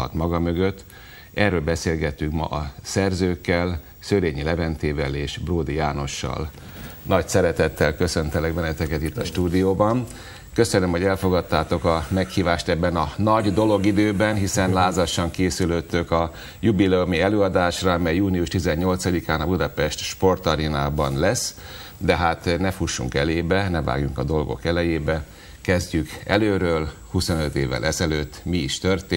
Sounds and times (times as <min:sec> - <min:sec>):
Speech: 0:00.0 - 0:29.1.